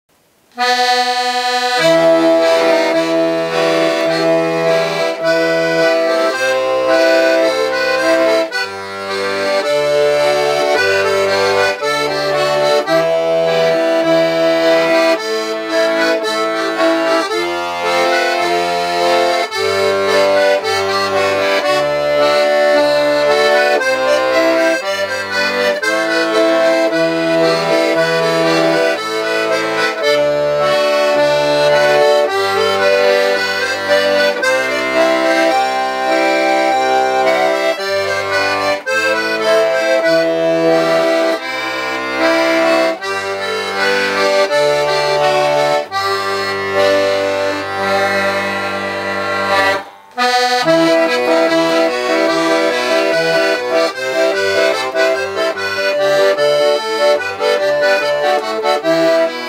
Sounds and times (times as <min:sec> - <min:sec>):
Accordion: 0:00.2 - 0:59.4.